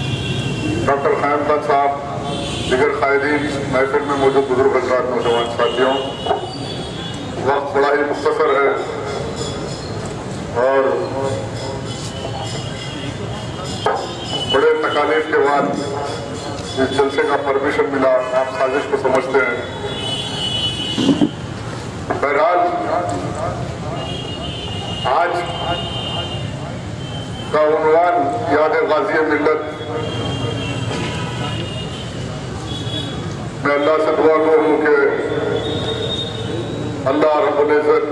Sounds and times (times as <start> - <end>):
Narration, monologue: 0.4 - 12.2, 12.8 - 31.7, 33.4 - 38.1
Male speech, man speaking: 0.9 - 2.1, 2.7 - 6.1, 7.4 - 8.9, 10.6 - 11.4, 13.9 - 19.7, 22.2 - 24.2, 25.0 - 26.4, 27.5 - 30.1, 33.6 - 35.4, 37.0 - 38.1.